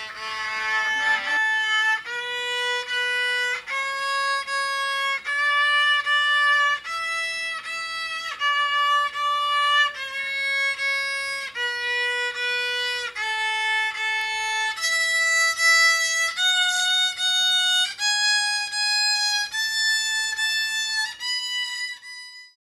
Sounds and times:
Violin, fiddle: 0:00.0 - 0:22.6.

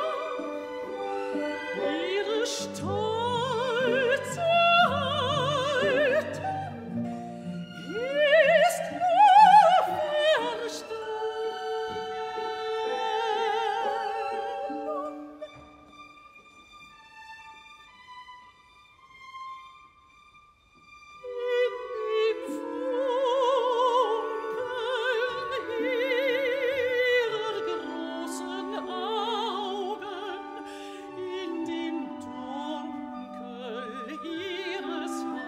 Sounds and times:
Opera: 0:00.0 - 0:35.4
Orchestra: 0:00.0 - 0:35.4.

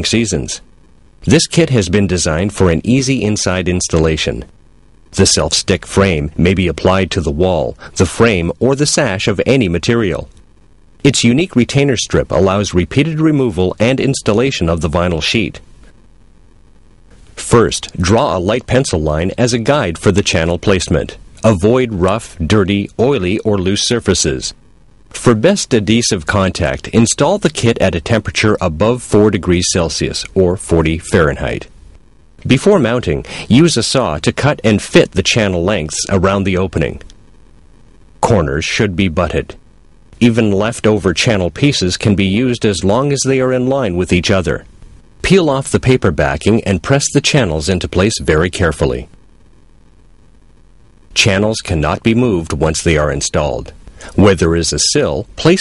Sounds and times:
Speech: 0:00.0 - 0:04.5, 0:05.2 - 0:10.4, 0:11.0 - 0:15.7, 0:17.4 - 0:24.6, 0:25.2 - 0:31.7, 0:32.4 - 0:37.1, 0:38.2 - 0:39.6, 0:40.2 - 0:49.1, 0:51.1 - 0:55.6.

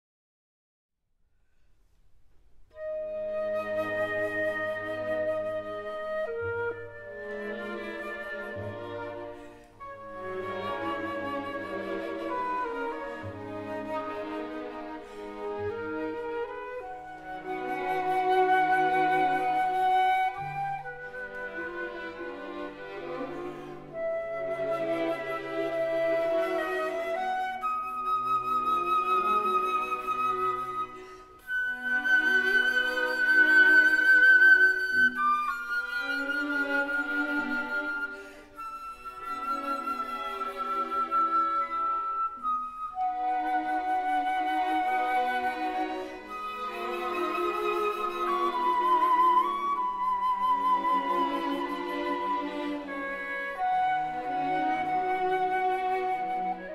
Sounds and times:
Flute: 0:02.4 - 0:56.7.

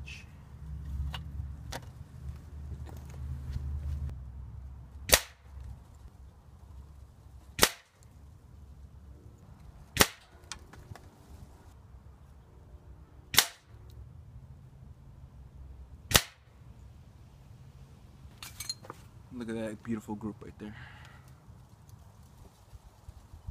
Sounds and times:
Cap gun: 0:05.1 - 0:05.4, 0:07.6 - 0:07.9, 0:10.0 - 0:10.3, 0:13.3 - 0:13.7, 0:16.1 - 0:16.4.

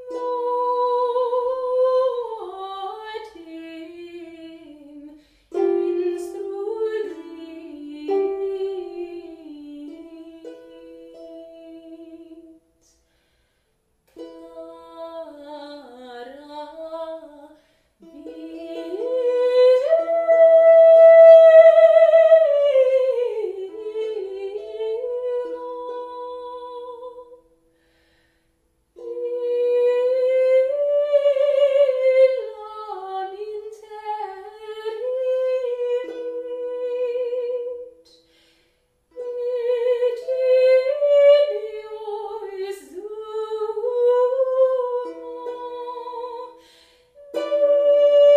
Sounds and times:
Pizzicato: 0:00.0 - 0:13.2, 0:13.8 - 0:28.1, 0:28.8 - 0:48.3
Harp: 0:00.0 - 0:48.3.

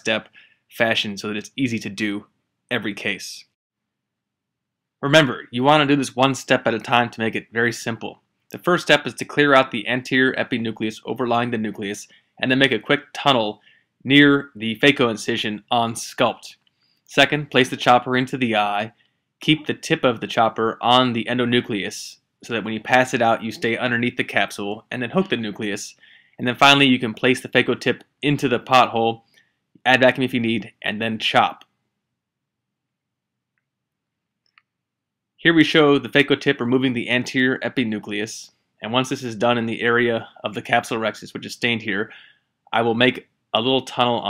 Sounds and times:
Speech: 0:00.0 - 0:03.6, 0:05.0 - 0:29.2, 0:29.8 - 0:31.7, 0:35.4 - 0:44.3.

